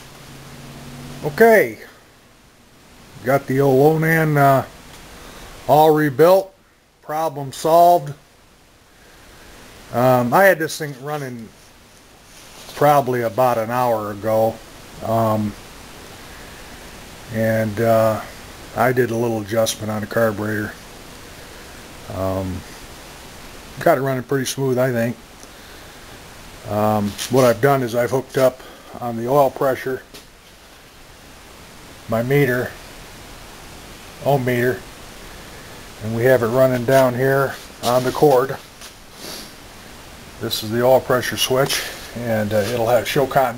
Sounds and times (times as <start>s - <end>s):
Speech: 1.2s - 2.0s, 3.2s - 4.8s, 5.7s - 8.2s, 9.9s - 11.5s, 12.7s - 15.6s, 17.3s - 20.8s, 22.1s - 22.7s, 23.8s - 25.2s, 26.6s - 30.1s, 32.1s - 32.8s, 34.2s - 34.9s, 36.0s - 38.7s, 40.4s - 43.5s.